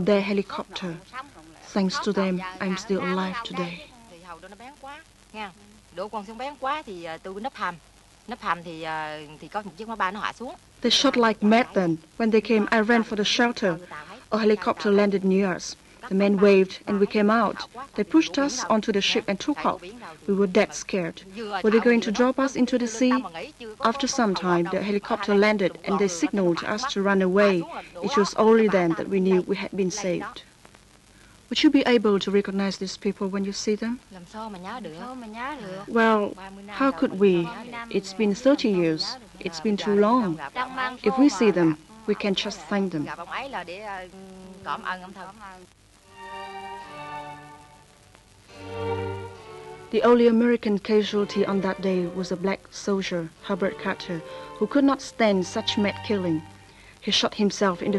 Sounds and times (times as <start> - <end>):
Speech: 0.0 - 30.5, 31.5 - 45.7, 49.9 - 56.4, 57.0 - 57.9.